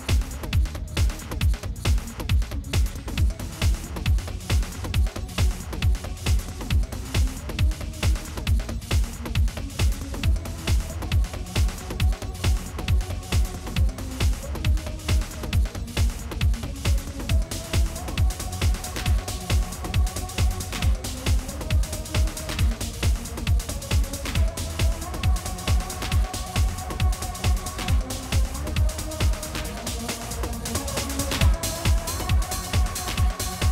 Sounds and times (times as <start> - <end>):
Techno: 0.0 - 33.7.